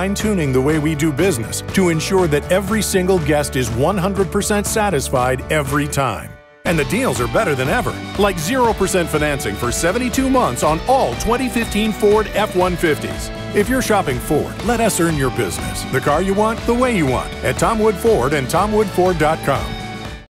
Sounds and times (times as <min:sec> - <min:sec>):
Speech: 0:00.0 - 0:19.8
Music: 0:00.0 - 0:20.3.